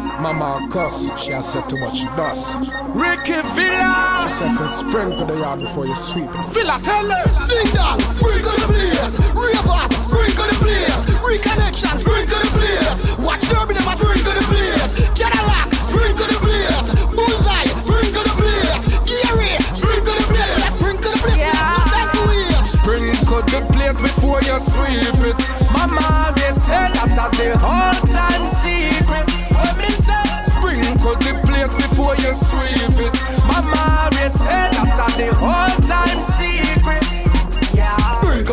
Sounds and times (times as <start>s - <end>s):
Music: 0.0s - 38.5s.